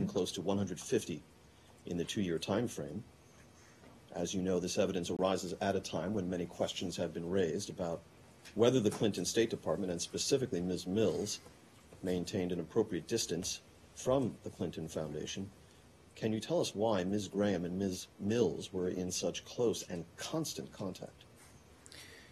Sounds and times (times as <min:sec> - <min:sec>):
Speech: 0:00.0 - 0:01.2, 0:01.9 - 0:03.1, 0:04.1 - 0:15.6, 0:16.2 - 0:21.2.